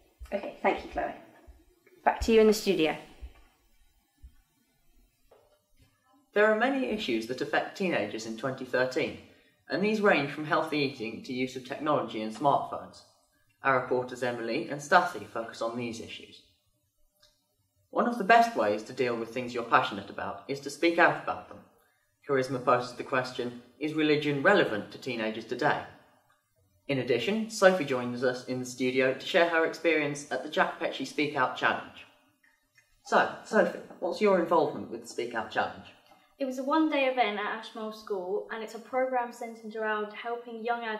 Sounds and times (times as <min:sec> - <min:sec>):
Speech: 0:00.3 - 0:01.2, 0:02.1 - 0:03.0, 0:06.4 - 0:13.0, 0:13.7 - 0:16.4, 0:18.0 - 0:21.6, 0:22.3 - 0:25.8, 0:26.9 - 0:32.0, 0:33.1 - 0:40.9.